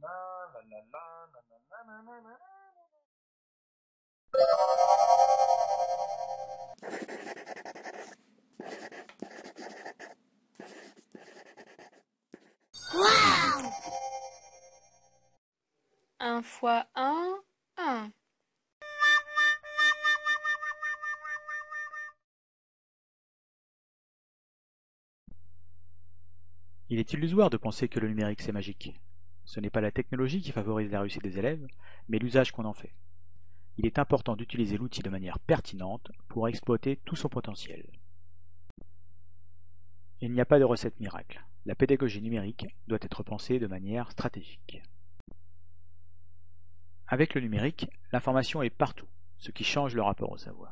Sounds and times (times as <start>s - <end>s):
Speech: 0.0s - 2.5s, 16.2s - 18.1s, 26.9s - 32.9s, 33.8s - 37.9s, 40.2s - 44.9s, 47.1s - 50.7s
Music: 4.4s - 6.7s, 18.8s - 22.2s.